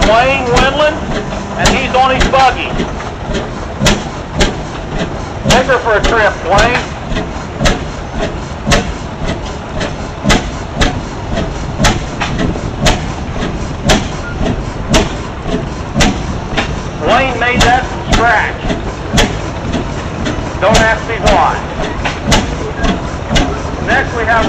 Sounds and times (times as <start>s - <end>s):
Speech: 0.0s - 1.0s, 1.6s - 2.8s, 5.5s - 6.9s, 17.0s - 18.7s, 20.6s - 21.7s, 23.4s - 24.4s
Vehicle: 0.0s - 24.4s.